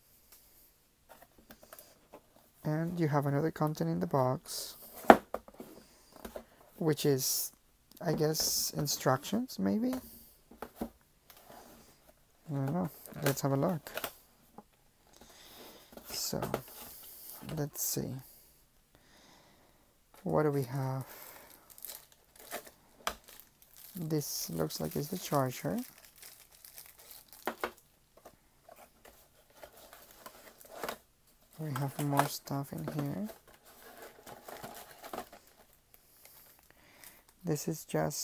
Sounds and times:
Speech: 2.6s - 4.8s, 6.8s - 10.1s, 12.5s - 14.0s, 16.1s - 16.7s, 17.4s - 18.3s, 20.2s - 21.1s, 23.9s - 25.9s, 31.6s - 33.4s, 37.4s - 38.2s
Crumpling, crinkling: 21.0s - 27.8s, 28.7s - 37.4s.

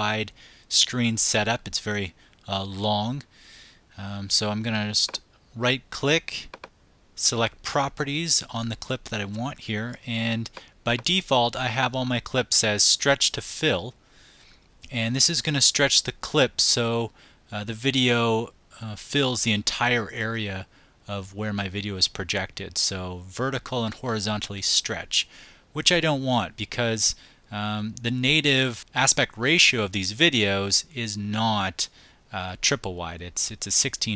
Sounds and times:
Speech: 0.0s - 3.3s, 4.0s - 6.5s, 7.2s - 14.0s, 14.8s - 34.1s.

